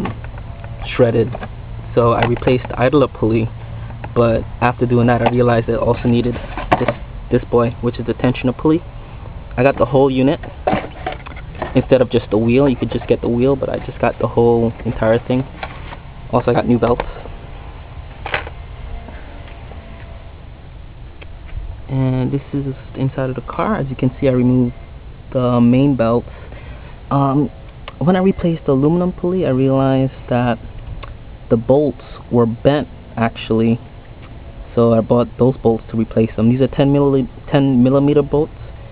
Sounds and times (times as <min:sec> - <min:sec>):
Speech: 0:00.8 - 0:03.5, 0:04.1 - 0:08.8, 0:09.6 - 0:10.4, 0:11.7 - 0:15.5, 0:16.3 - 0:17.1, 0:21.9 - 0:26.3, 0:27.1 - 0:30.6, 0:31.5 - 0:33.8, 0:34.7 - 0:38.5.